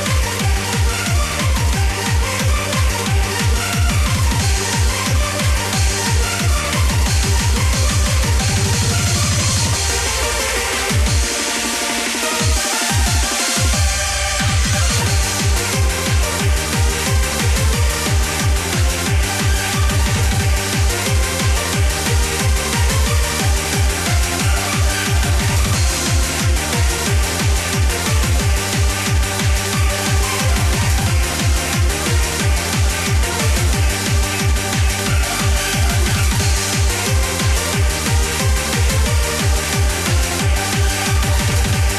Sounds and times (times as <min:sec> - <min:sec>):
Techno: 0:00.0 - 0:41.9.